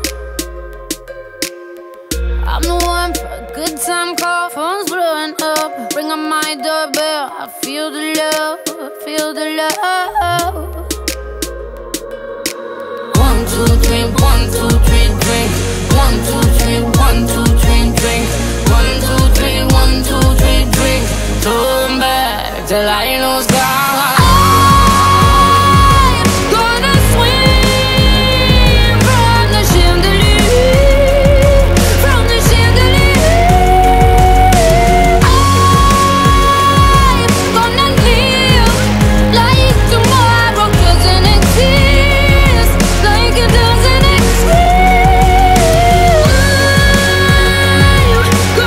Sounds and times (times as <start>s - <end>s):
Soundtrack music: 0.0s - 48.6s.